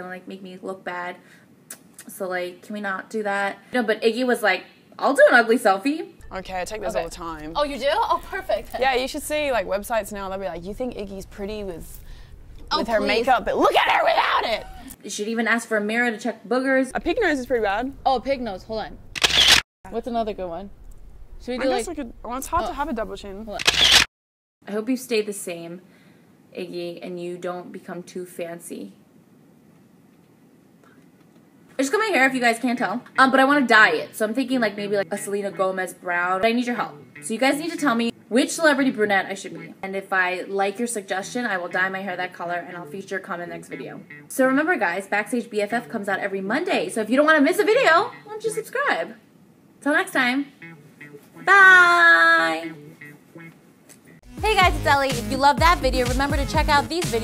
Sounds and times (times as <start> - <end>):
Music: 35.0 - 38.1, 39.3 - 39.8, 41.1 - 46.9, 50.4 - 57.2.